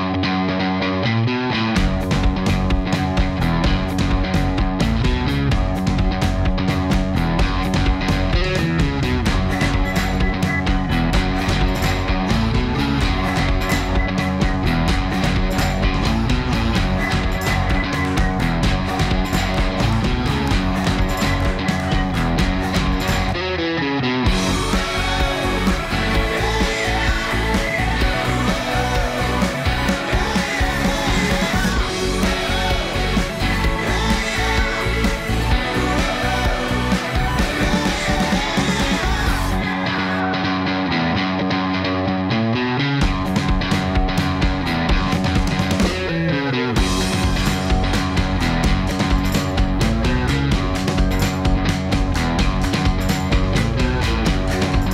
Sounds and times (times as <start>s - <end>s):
Techno: 1.8s - 40.6s, 43.0s - 54.9s.